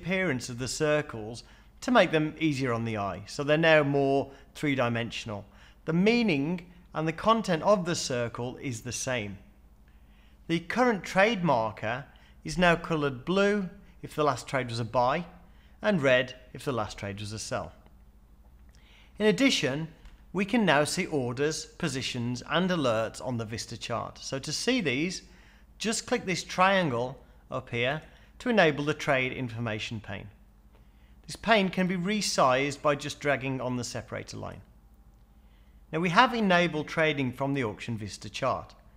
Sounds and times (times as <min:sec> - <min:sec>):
Speech: 0:00.0 - 0:09.5, 0:10.5 - 0:17.8, 0:19.2 - 0:30.4, 0:31.2 - 0:34.7, 0:35.9 - 0:38.9.